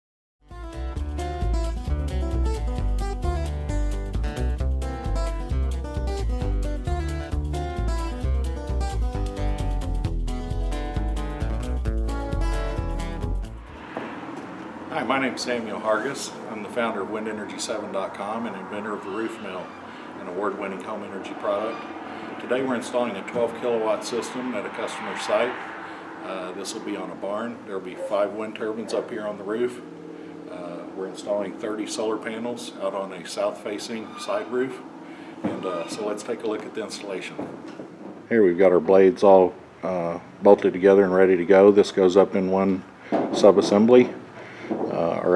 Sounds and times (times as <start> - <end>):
Music: 0.4 - 13.8
Speech: 14.9 - 21.8, 22.4 - 25.6, 26.2 - 29.9, 30.5 - 34.8, 35.5 - 37.4, 38.3 - 42.8, 43.4 - 44.2, 44.9 - 45.3.